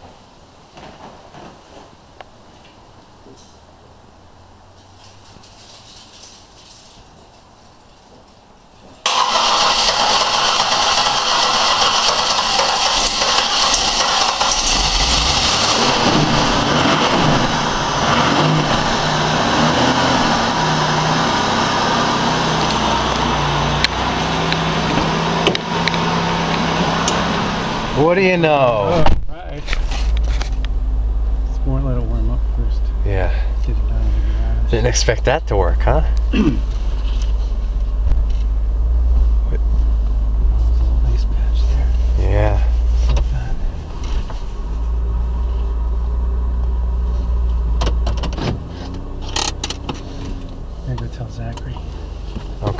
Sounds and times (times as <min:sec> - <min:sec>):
Speech: 0:28.0 - 0:29.7, 0:31.5 - 0:36.6, 0:41.0 - 0:42.7, 0:50.8 - 0:51.8.